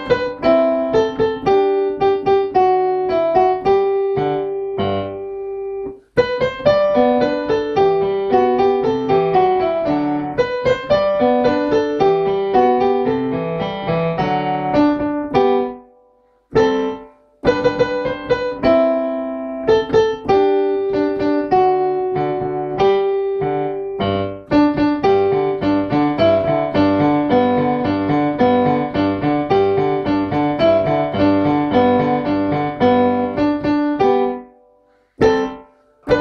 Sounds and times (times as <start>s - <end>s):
Music: 0.0s - 36.2s.